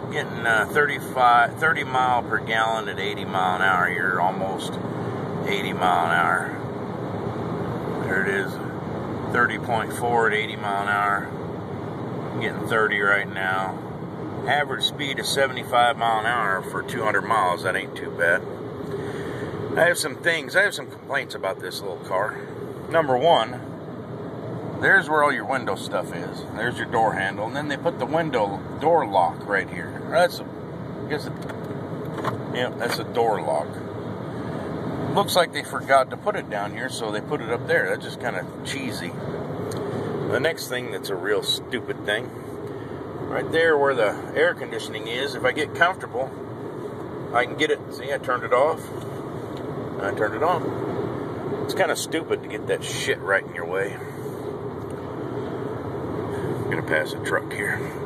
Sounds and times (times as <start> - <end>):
Speech: 0.0 - 4.8, 5.4 - 6.6, 8.0 - 11.3, 12.4 - 13.8, 14.4 - 18.4, 19.7 - 23.7, 24.8 - 30.5, 31.1 - 31.4, 32.5 - 33.8, 35.1 - 39.2, 40.3 - 42.3, 43.3 - 46.4, 47.3 - 49.0, 50.0 - 50.7, 51.7 - 54.2, 56.7 - 58.0
Vehicle: 0.0 - 58.0.